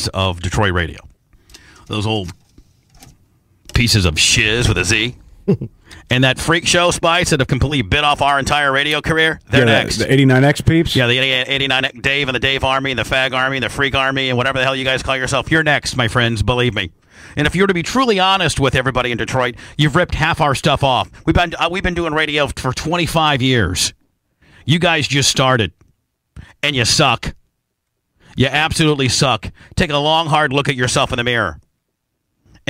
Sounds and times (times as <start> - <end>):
Speech: 0.0 - 1.1, 1.9 - 2.4, 3.7 - 5.2, 6.0 - 24.0, 24.7 - 25.8, 26.5 - 27.4, 28.4 - 31.6.